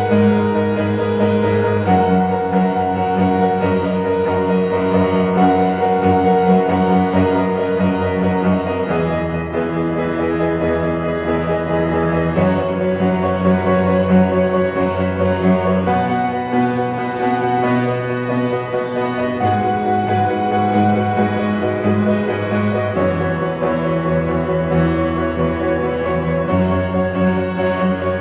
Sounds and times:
Orchestra: 0:00.0 - 0:28.2.

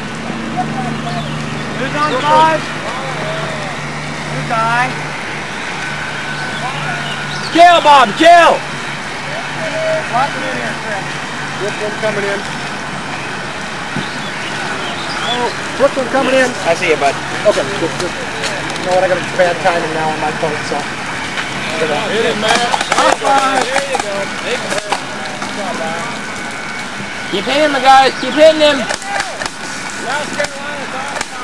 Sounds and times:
Speech: 0:00.5 - 0:05.0, 0:06.6 - 0:08.6, 0:09.3 - 0:12.5, 0:21.6 - 0:26.2, 0:27.3 - 0:29.4, 0:30.0 - 0:31.4.

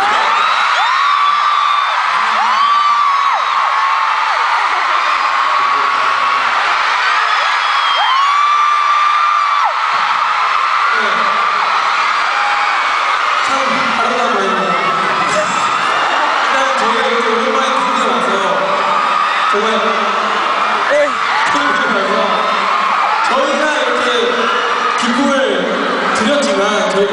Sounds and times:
Speech: 0:13.4 - 0:15.5, 0:16.5 - 0:18.7, 0:19.5 - 0:20.1, 0:20.9 - 0:22.4, 0:23.3 - 0:24.4, 0:25.0 - 0:27.1.

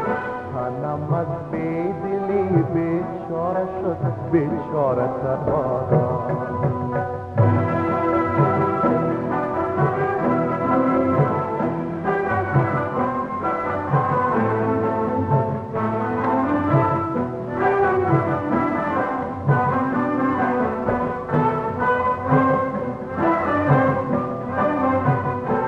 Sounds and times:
Brass instrument: 0:00.0 - 0:25.6.

